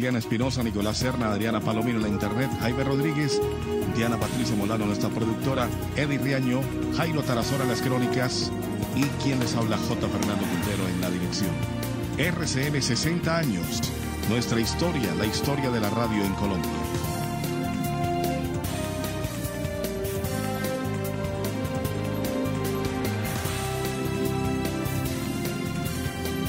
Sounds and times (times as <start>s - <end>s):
Speech: 0.0s - 11.6s, 12.2s - 16.7s
Music: 0.0s - 26.4s.